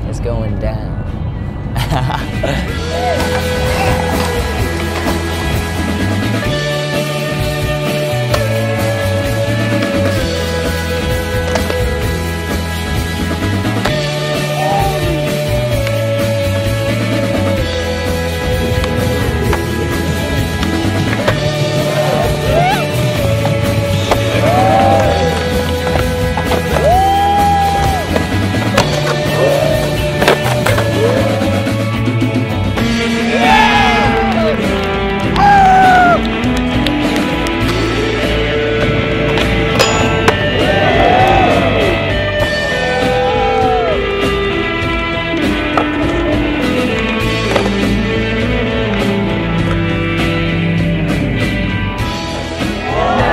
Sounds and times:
Rock and roll: 2.3s - 53.3s.

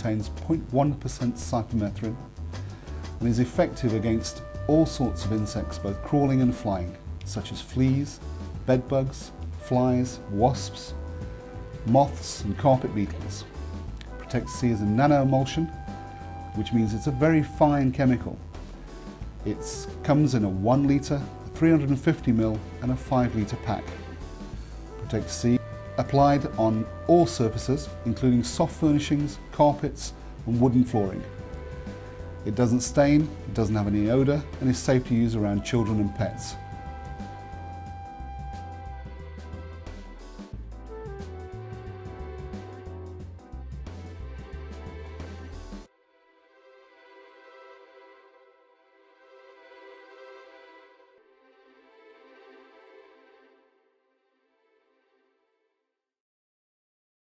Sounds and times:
Speech: 0.0s - 2.2s, 3.2s - 11.0s, 11.9s - 13.5s, 14.2s - 15.7s, 16.6s - 18.4s, 19.4s - 24.0s, 25.0s - 31.3s, 32.5s - 36.6s
Music: 0.0s - 56.2s.

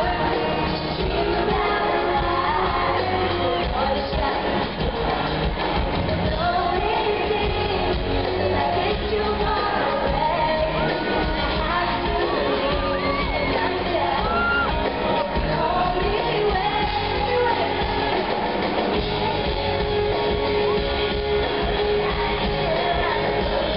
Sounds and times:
Female singing: 0.0s - 23.7s
Music: 0.0s - 23.7s.

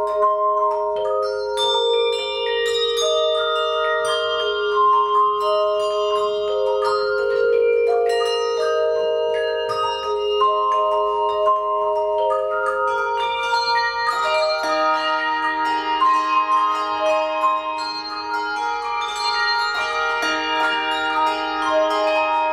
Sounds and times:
Music: 0.0s - 22.5s.

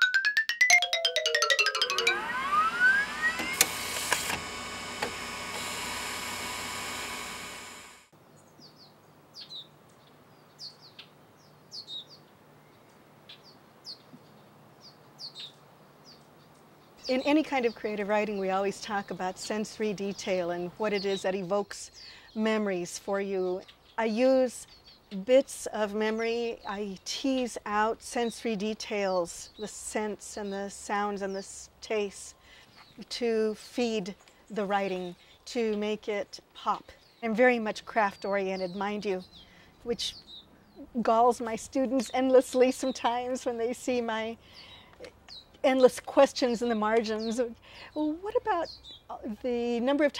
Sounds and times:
Speech: 17.1s - 24.6s, 25.2s - 32.3s, 33.0s - 39.2s, 39.9s - 40.2s, 40.8s - 44.4s, 45.6s - 50.2s.

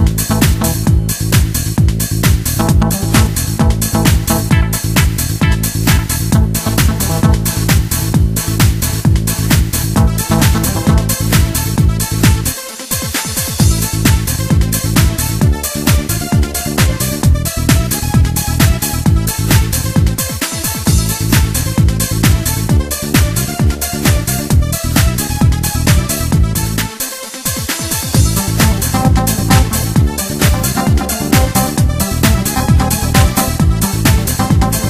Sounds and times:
Music: 0.0s - 34.9s.

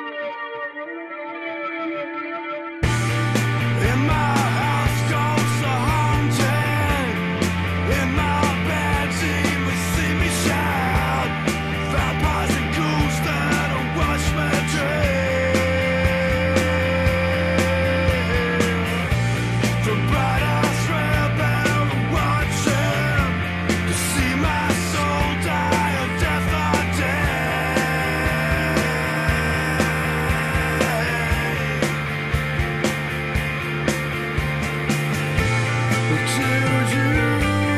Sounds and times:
Soundtrack music: 0.0s - 37.7s.

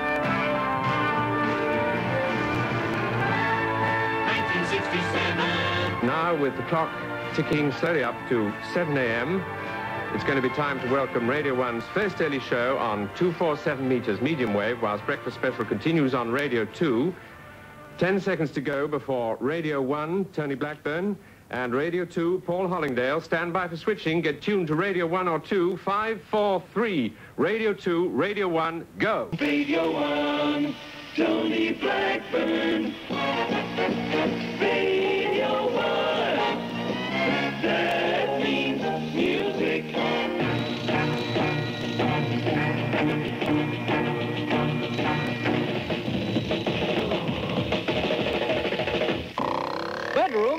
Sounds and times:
Music: 0.0s - 18.9s, 29.4s - 49.6s
Speech: 6.0s - 9.4s, 10.2s - 17.2s, 18.0s - 29.4s, 50.1s - 50.5s.

